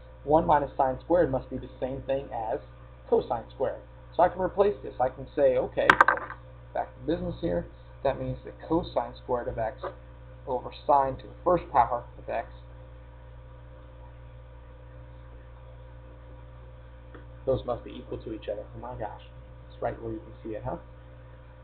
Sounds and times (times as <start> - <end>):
Speech: 0.3 - 5.9, 6.8 - 9.9, 10.5 - 12.6, 17.5 - 20.9.